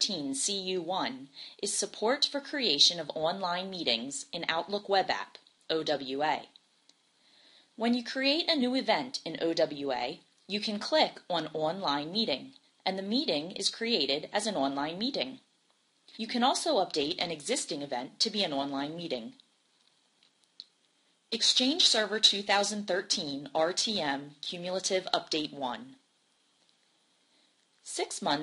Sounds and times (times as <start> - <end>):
Speech: 0.0 - 6.6, 7.8 - 15.5, 16.2 - 19.4, 21.4 - 26.0, 27.8 - 28.4.